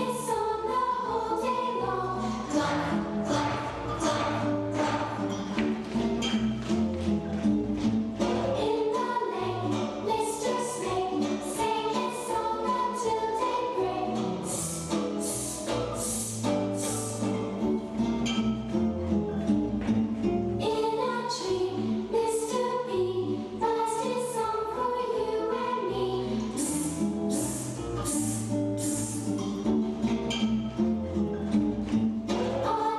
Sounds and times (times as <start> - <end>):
Music: 0.0 - 32.9.